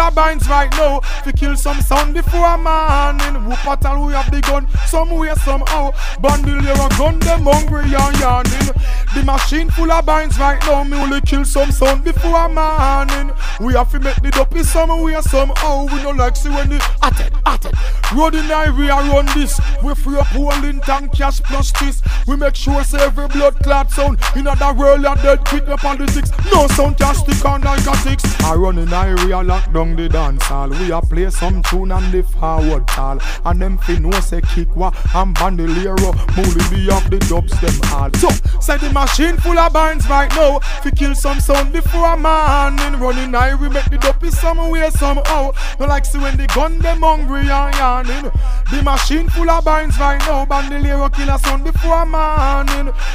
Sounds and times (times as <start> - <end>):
Hip hop music: 0.0 - 53.1.